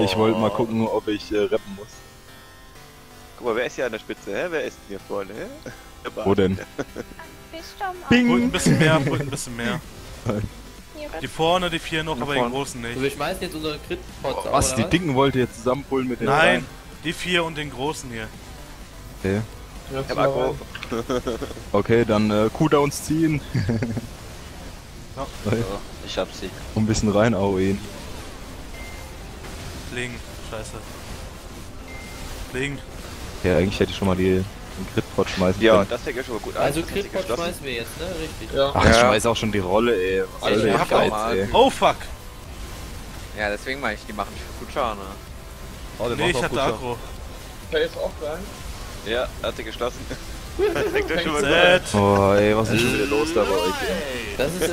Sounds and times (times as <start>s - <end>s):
Speech: 0.0s - 1.9s, 3.4s - 6.7s, 7.6s - 18.3s, 19.2s - 20.6s, 33.4s - 42.1s, 46.0s - 47.0s, 50.8s - 54.7s.